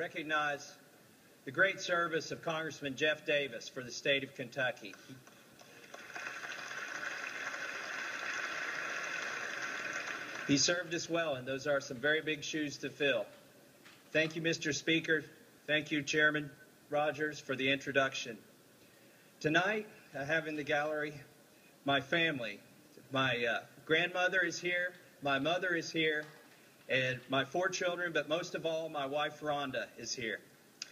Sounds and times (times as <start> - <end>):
Male speech, man speaking: 0.0 - 0.8, 1.5 - 5.2, 10.5 - 13.3, 14.2 - 18.4, 19.4 - 21.3, 21.9 - 26.3, 26.9 - 30.4
Narration, monologue: 0.0 - 6.0, 10.2 - 30.9.